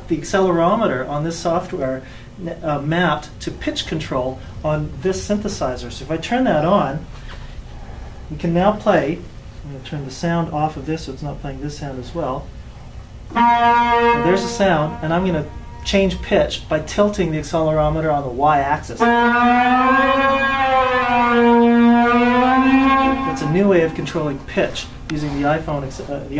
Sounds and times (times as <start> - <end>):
Speech: 0.0 - 7.1, 8.3 - 12.5, 14.2 - 19.1, 23.2 - 26.3.